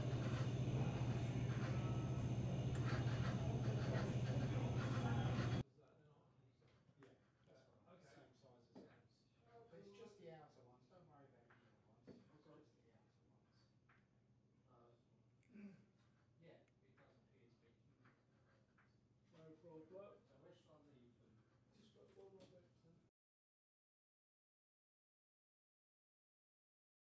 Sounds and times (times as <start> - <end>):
Speech: 0.2 - 13.7, 16.4 - 17.8, 19.3 - 23.1.